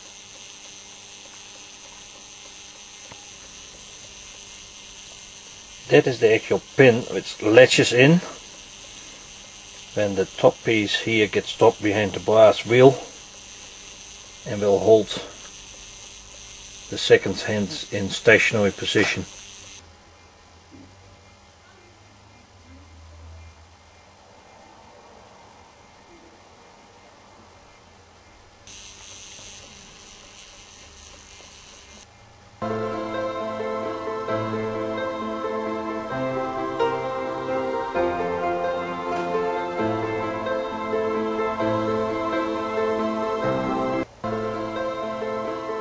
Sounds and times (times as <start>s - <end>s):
Speech: 5.9s - 8.4s, 10.0s - 13.1s, 14.5s - 15.4s, 16.9s - 19.3s.